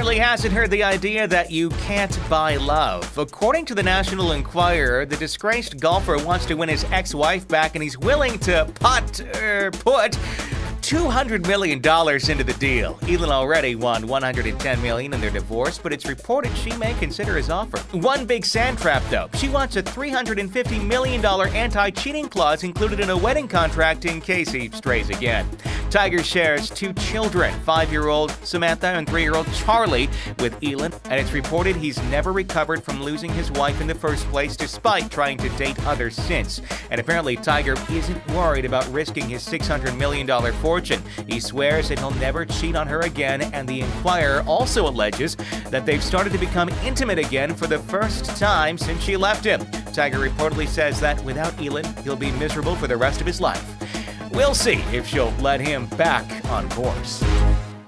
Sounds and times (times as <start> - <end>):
Speech: 0.0 - 10.2, 10.8 - 53.7, 54.3 - 57.3
Music: 0.0 - 57.8.